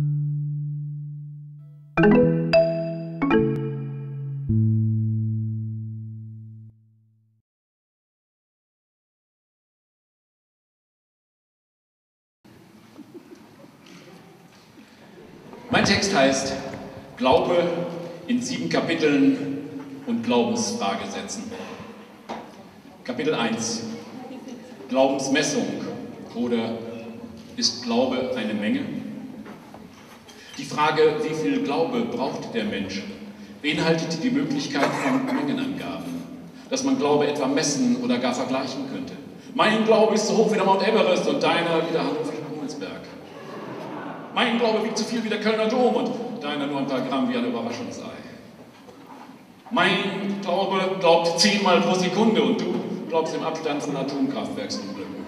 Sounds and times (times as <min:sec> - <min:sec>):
Speech: 0:15.5 - 0:21.8, 0:23.0 - 0:29.1, 0:30.6 - 0:43.2, 0:44.4 - 0:48.4, 0:49.7 - 0:55.2.